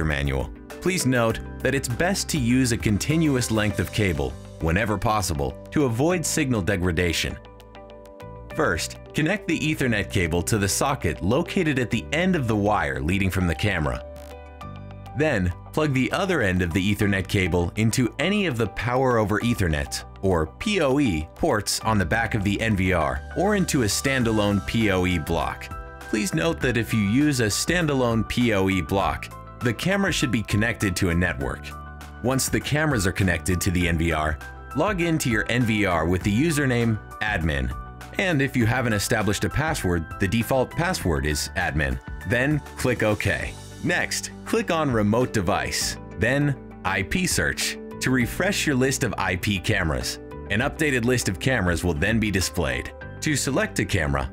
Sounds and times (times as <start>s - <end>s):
Speech: 0.0s - 7.4s, 8.5s - 14.0s, 15.2s - 54.3s
Music: 0.0s - 54.3s.